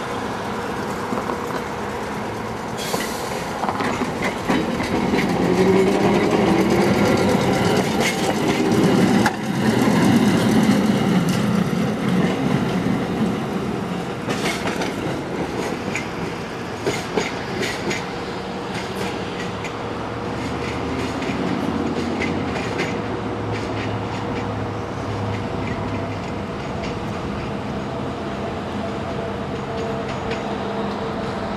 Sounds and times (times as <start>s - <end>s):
Railroad car, train wagon: 0.0s - 31.5s
Train: 0.0s - 31.5s
Clickety-clack: 0.8s - 13.3s, 14.1s - 18.1s, 18.7s - 24.6s, 25.3s - 27.6s.